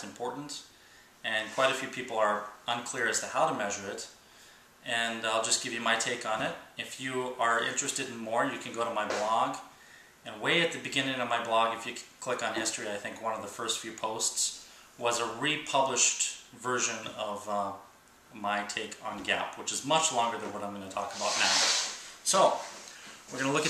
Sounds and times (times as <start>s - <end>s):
Speech: 0.0s - 4.2s, 4.8s - 9.7s, 10.3s - 22.7s, 23.3s - 23.7s.